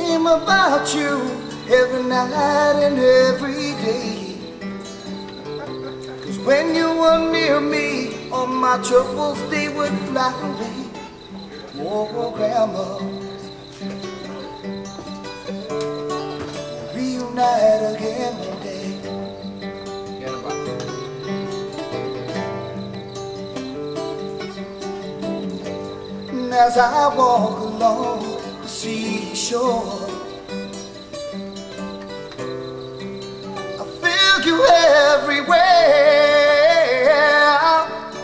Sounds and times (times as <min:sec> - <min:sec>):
Music: 0:00.0 - 0:38.2.